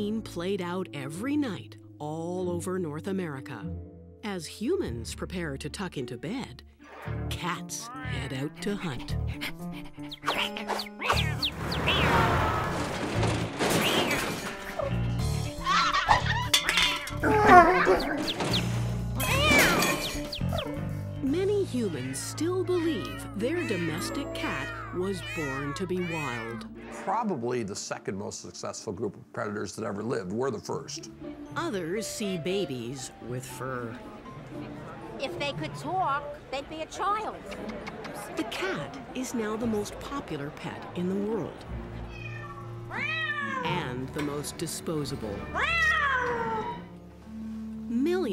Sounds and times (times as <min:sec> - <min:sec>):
Music: 0:00.0 - 0:48.3
Speech: 0:07.3 - 0:09.2, 0:21.3 - 0:34.0, 0:43.6 - 0:45.4.